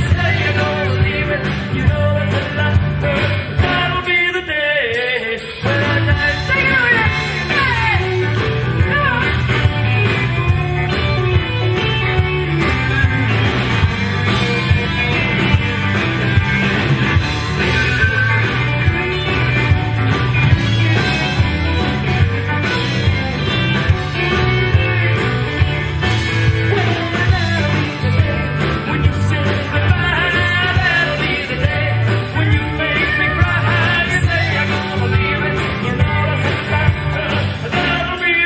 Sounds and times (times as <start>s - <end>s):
Pop music: 0.0s - 38.4s
Rock and roll: 0.0s - 38.4s.